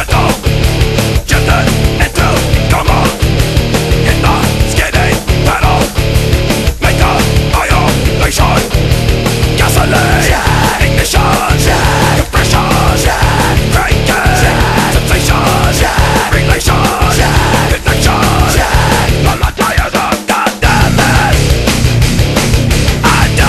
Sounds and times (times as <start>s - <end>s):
Music: 0.0s - 23.4s.